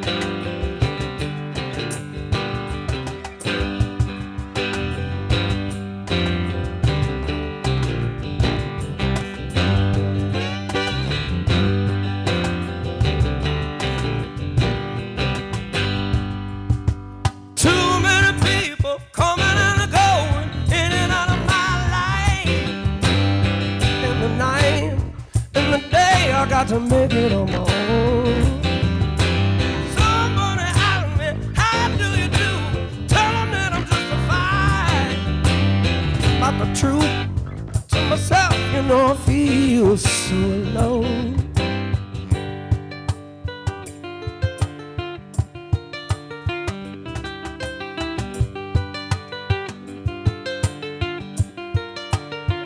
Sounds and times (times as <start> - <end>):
Guitar: 0.0 - 52.6.